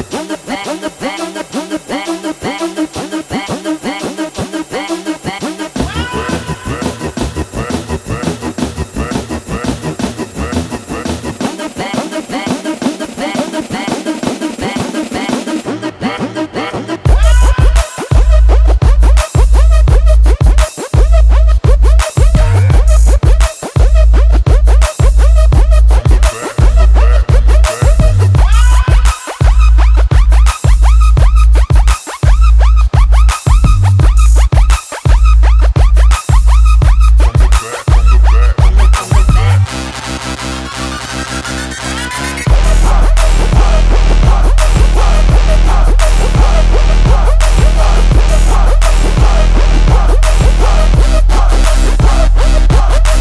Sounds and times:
Music: 0.0s - 53.2s.

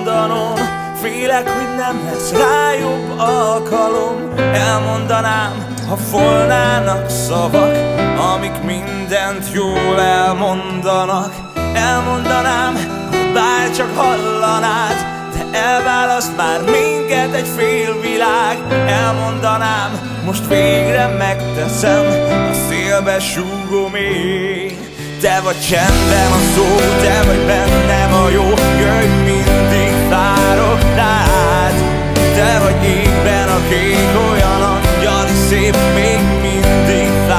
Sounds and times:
Music: 0.0s - 37.3s.

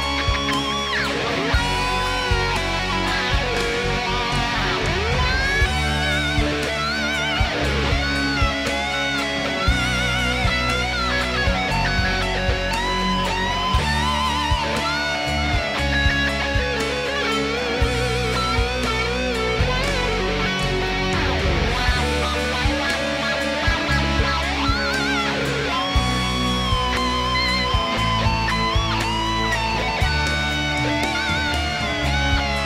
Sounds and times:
Strum: 0.0s - 32.6s.

